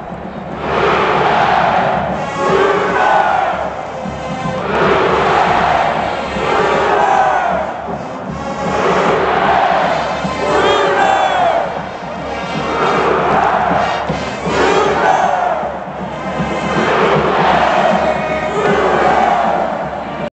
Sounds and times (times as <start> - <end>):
Music: 0.0 - 20.3.